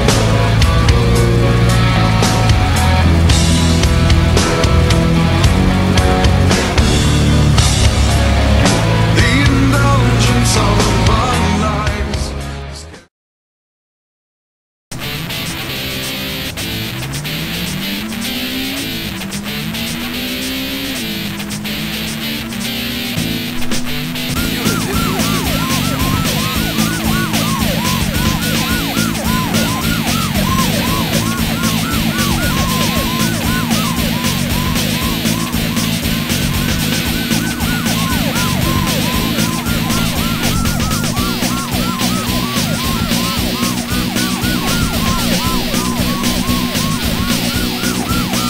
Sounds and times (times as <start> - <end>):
Music: 0.0 - 13.1, 15.0 - 48.5.